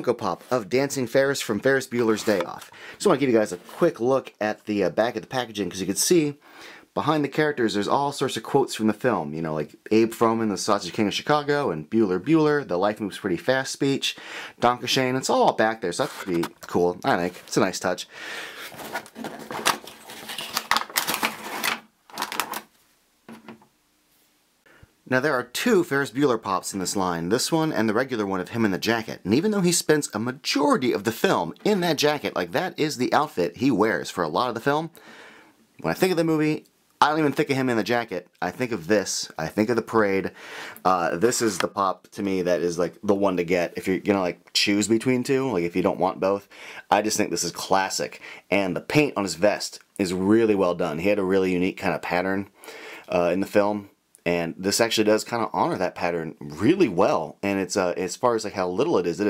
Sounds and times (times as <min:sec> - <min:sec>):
Speech: 0:00.0 - 0:18.1, 0:25.1 - 0:35.0, 0:35.8 - 0:59.2.